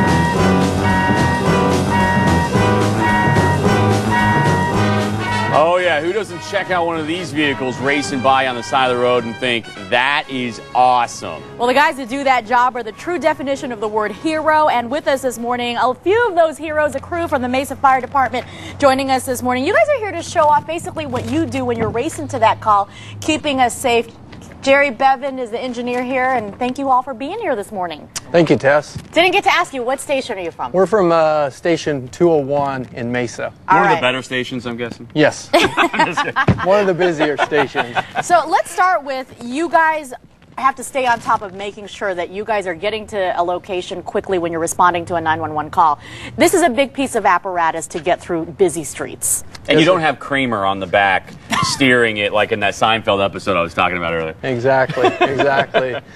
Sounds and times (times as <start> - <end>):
Music: 0.0 - 15.6.